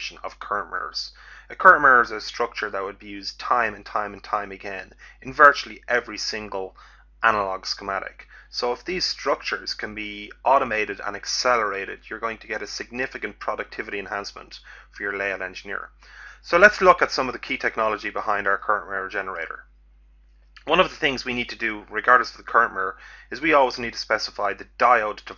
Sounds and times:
Speech: 0.0 - 19.6, 20.6 - 25.3.

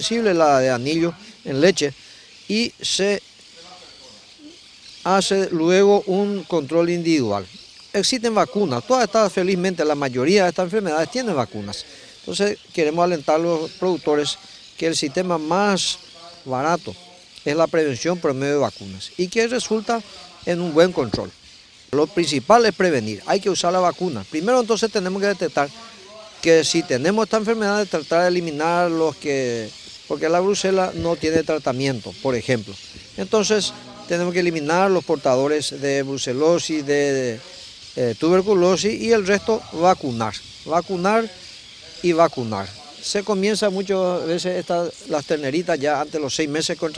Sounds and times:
Speech: 0.0 - 21.3, 22.0 - 46.9.

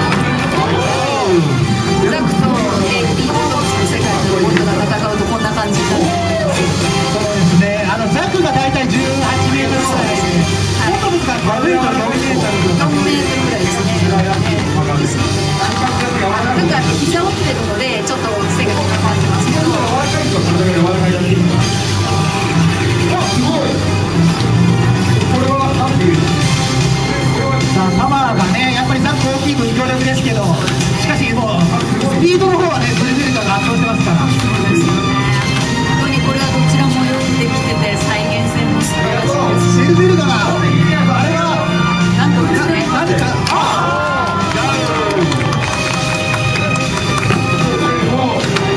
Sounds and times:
Music: 0.0 - 48.7.

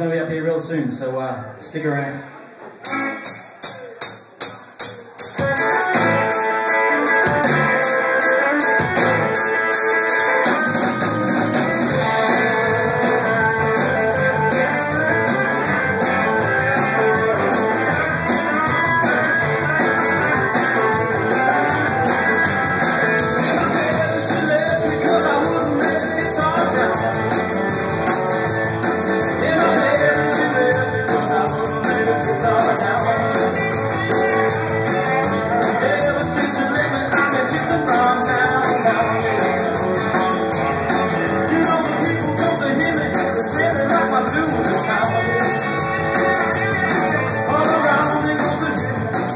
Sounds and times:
Blues: 2.5 - 49.3.

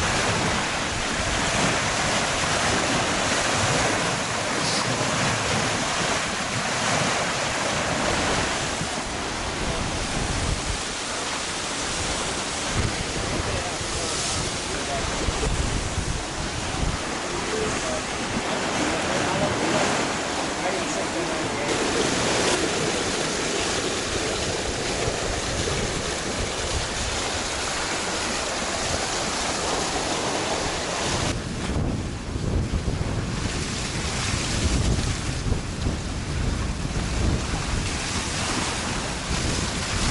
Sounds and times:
Wind noise (microphone): 0.0 - 20.0, 21.7 - 40.1
Sailboat, sailing ship: 0.0 - 40.1.

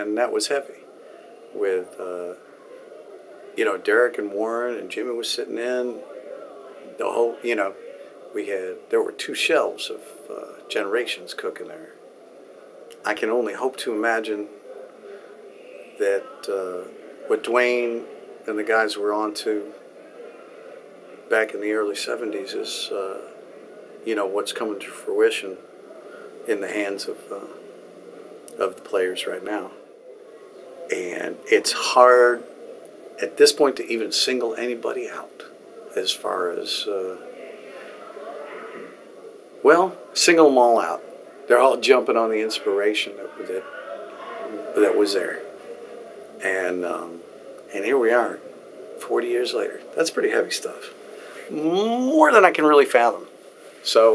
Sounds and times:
Speech: 0.0 - 0.9, 1.5 - 2.4, 3.5 - 12.0, 13.0 - 20.6, 21.3 - 23.4, 24.0 - 25.6, 26.5 - 27.6, 28.5 - 29.8, 30.9 - 32.5, 33.2 - 39.0, 39.6 - 45.6, 46.4 - 54.1.

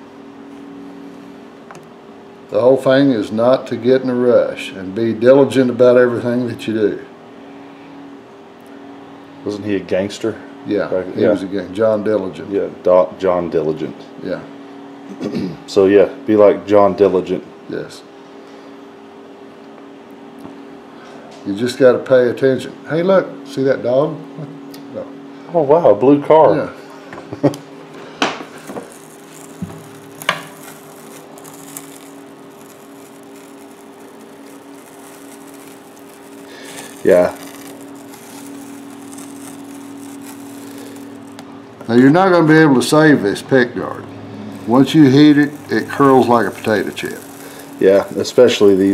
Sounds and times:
Speech: 2.5 - 7.1, 9.4 - 14.5, 15.7 - 18.1, 21.4 - 24.3, 24.9 - 26.8, 37.0 - 37.4, 41.9 - 44.1, 44.7 - 47.2, 47.8 - 48.9.

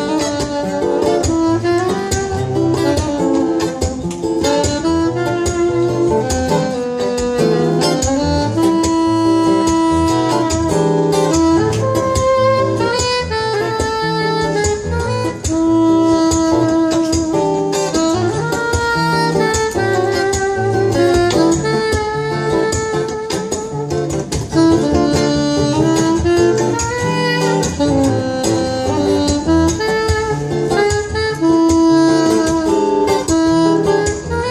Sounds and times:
Bass guitar: 0.0 - 34.5.

